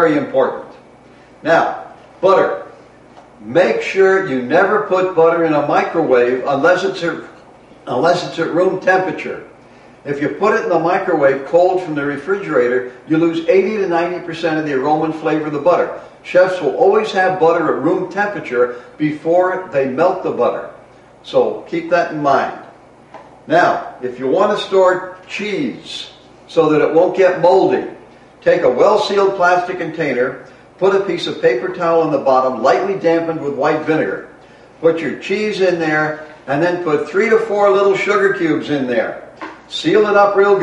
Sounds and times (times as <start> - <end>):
Speech: 0.0 - 0.8, 1.4 - 2.7, 3.4 - 22.7, 23.5 - 40.6.